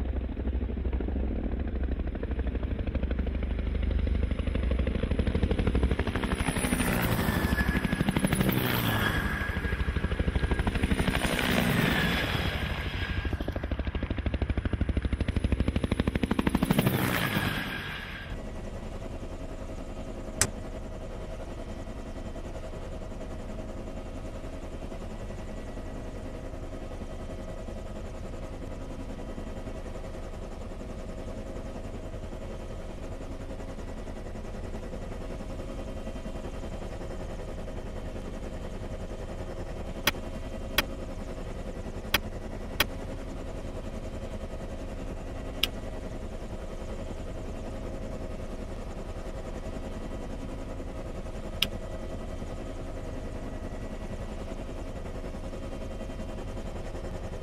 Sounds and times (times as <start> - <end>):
Heavy engine (low frequency): 0.0 - 57.4
Vehicle: 15.3 - 18.4.